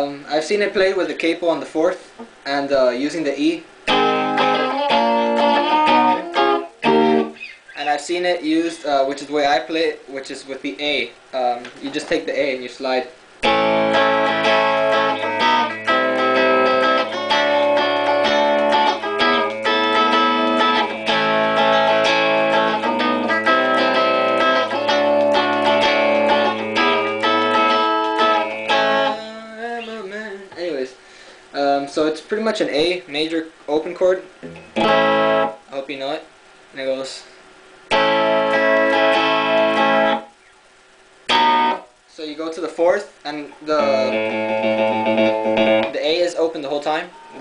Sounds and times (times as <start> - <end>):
Speech: 0.0 - 3.7, 7.8 - 13.2, 30.6 - 31.0, 31.6 - 34.3, 35.7 - 37.4, 42.1 - 44.2, 45.9 - 47.4
Music: 3.9 - 7.6, 13.4 - 30.6, 34.4 - 35.6, 37.9 - 40.4, 41.3 - 41.9, 43.7 - 46.0.